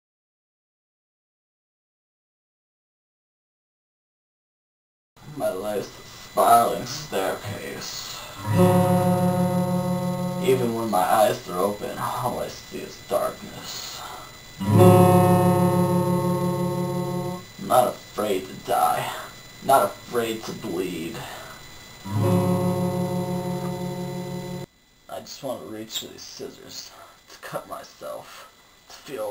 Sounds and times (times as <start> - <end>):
Speech: 5.2 - 8.4, 10.4 - 14.2, 17.6 - 21.5, 25.1 - 29.3
Music: 8.4 - 10.9, 14.6 - 17.5, 22.0 - 24.7.